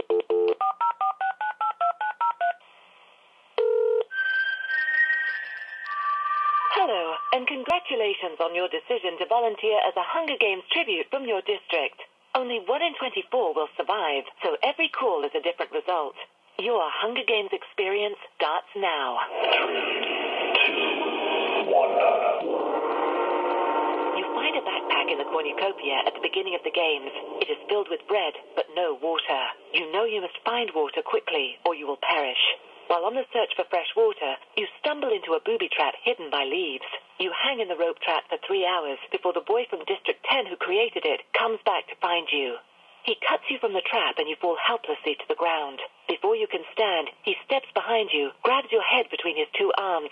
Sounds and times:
Speech: 6.7 - 19.3, 21.7 - 22.4, 24.2 - 50.1.

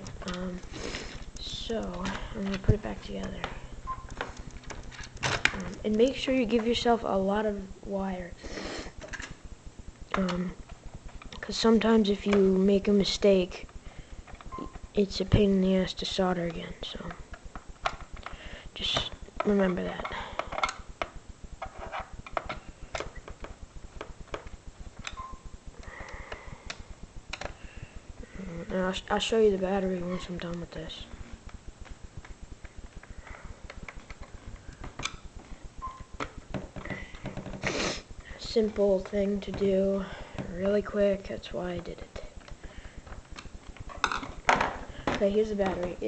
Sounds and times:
Inside, small room: 0.0 - 46.0
Speech: 0.2 - 0.7, 1.4 - 3.6, 5.6 - 8.4, 10.2 - 10.6, 11.4 - 13.7, 15.0 - 17.2, 18.8 - 20.2, 28.4 - 31.3, 38.4 - 42.3, 45.1 - 46.0.

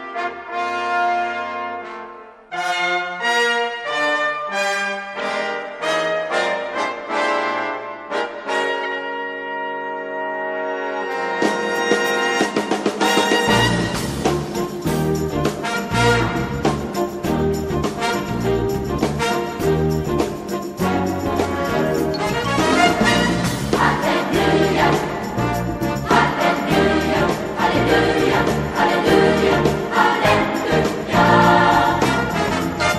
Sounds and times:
Music: 0.0 - 32.9.

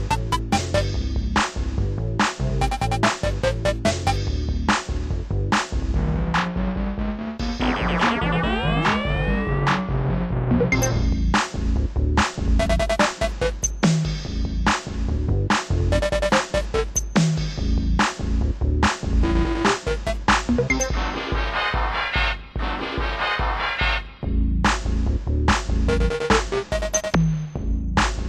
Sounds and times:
Video game music: 0.0 - 28.2.

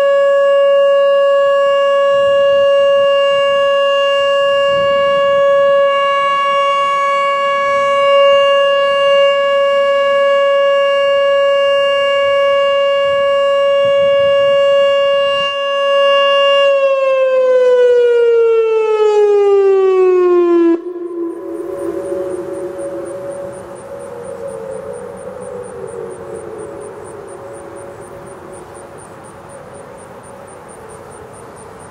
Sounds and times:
Civil defense siren: 0.0 - 31.9.

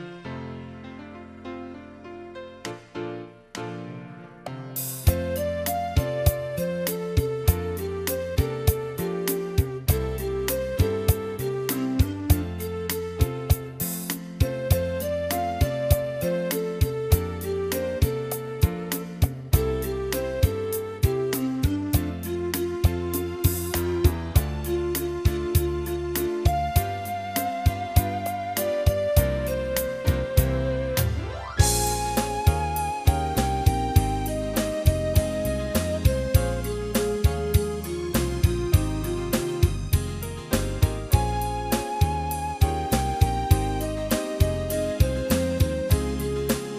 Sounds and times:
Music: 0.0 - 46.7.

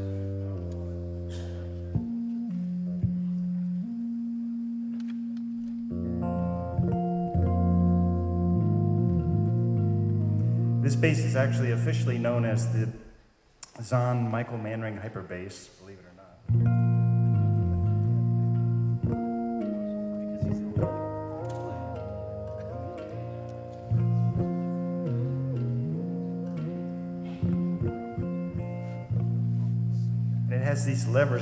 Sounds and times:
Electric guitar: 0.0 - 12.3, 16.5 - 31.4
Speech: 10.8 - 16.5, 30.5 - 31.4
Acoustic guitar: 16.5 - 31.4.

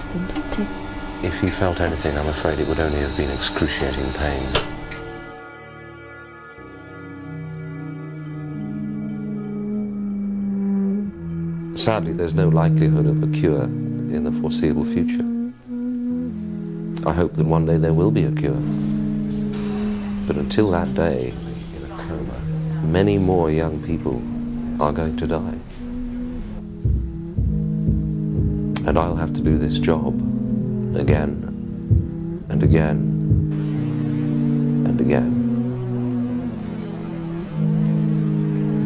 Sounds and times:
Music: 0.0 - 38.8
Speech: 0.2 - 4.6, 11.8 - 15.2, 17.0 - 18.8, 20.3 - 24.2, 24.8 - 25.6, 28.8 - 30.2, 30.9 - 31.5, 32.5 - 33.1, 34.8 - 35.4.

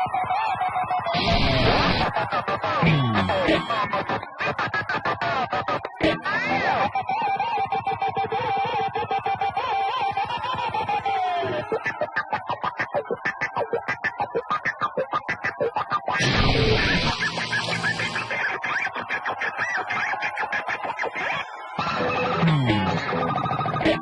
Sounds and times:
Guitar: 0.0 - 24.0.

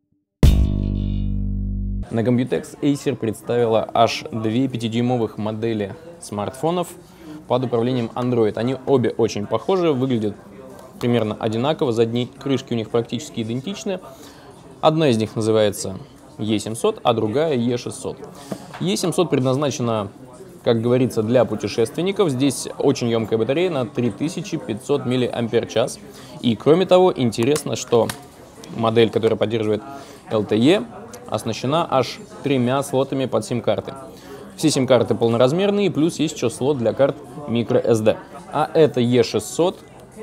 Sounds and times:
Speech: 2.1 - 40.2.

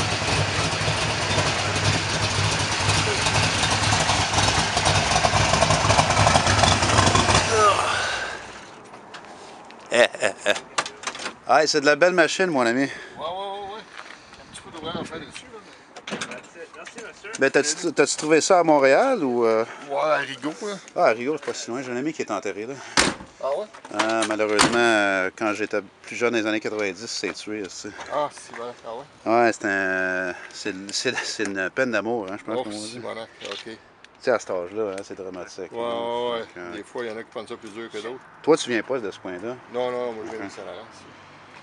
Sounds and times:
Car: 0.0 - 9.3.

